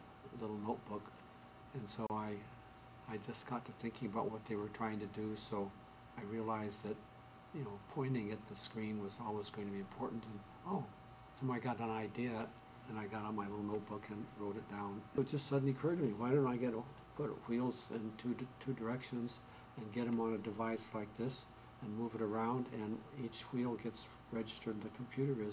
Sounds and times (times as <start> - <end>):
Speech: 0.3 - 25.5.